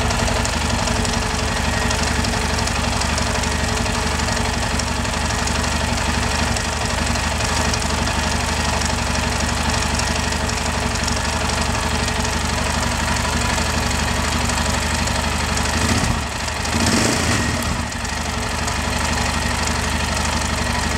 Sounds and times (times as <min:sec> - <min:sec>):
Medium engine (mid frequency): 0:00.0 - 0:20.9
Vehicle: 0:00.0 - 0:20.9.